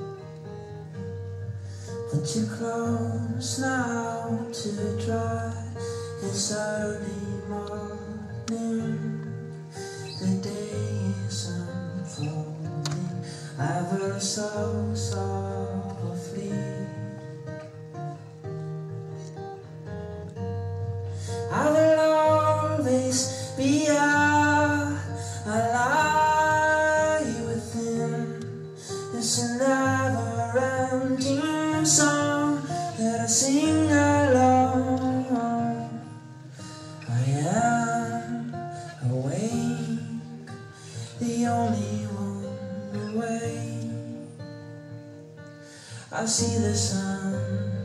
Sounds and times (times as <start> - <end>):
Music: 0.0 - 47.8.